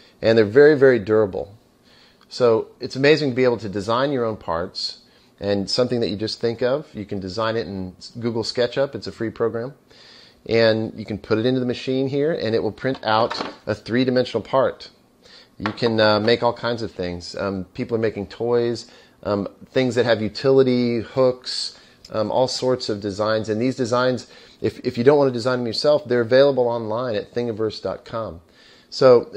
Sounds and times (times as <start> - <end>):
Speech: 0.2 - 1.6, 2.3 - 9.8, 10.5 - 15.0, 15.6 - 29.3.